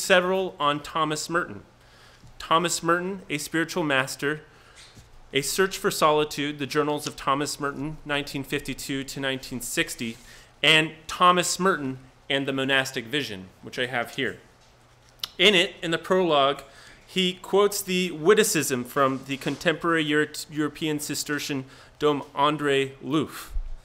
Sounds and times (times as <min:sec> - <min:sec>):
Speech: 0:00.0 - 0:01.7, 0:02.4 - 0:04.5, 0:05.3 - 0:14.5, 0:15.2 - 0:23.6.